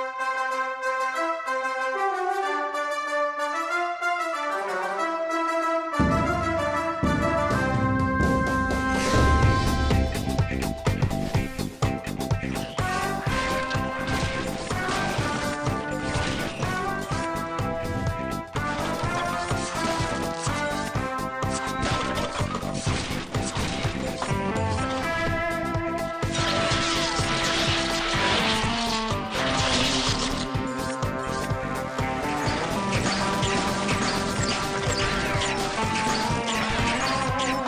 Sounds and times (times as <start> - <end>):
Music: 0.0 - 37.6.